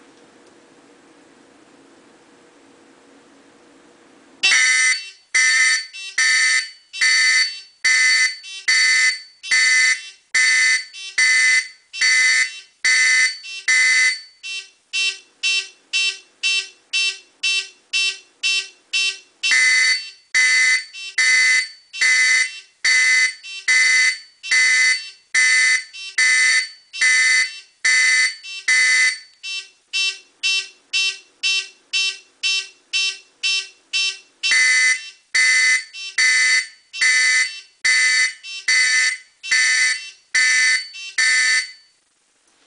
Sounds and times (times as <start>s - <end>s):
Fire alarm: 4.4s - 42.0s.